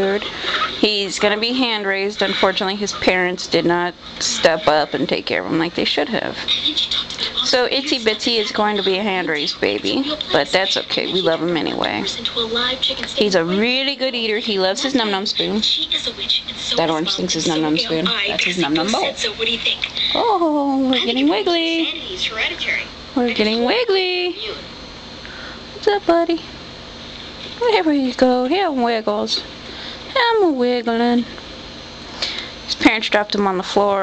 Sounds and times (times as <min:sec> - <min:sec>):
Speech: 0:00.0 - 0:24.7, 0:25.8 - 0:26.5, 0:27.6 - 0:29.5, 0:32.7 - 0:34.0.